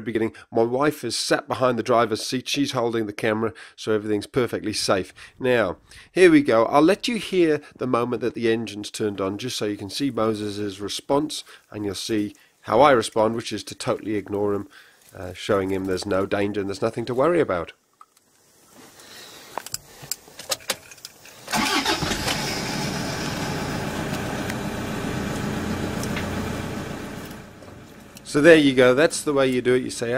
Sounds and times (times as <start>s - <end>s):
Speech: 0.0s - 17.8s, 28.3s - 30.1s
Car: 21.8s - 28.4s.